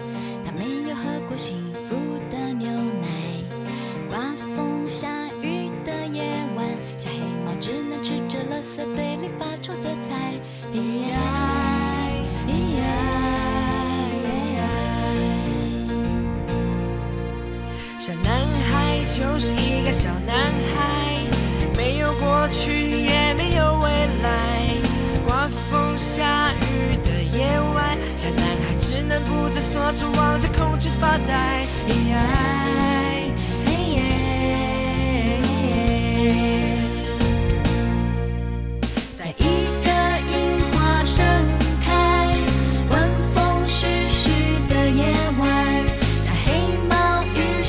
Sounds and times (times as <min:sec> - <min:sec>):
Music: 0:00.0 - 0:47.6.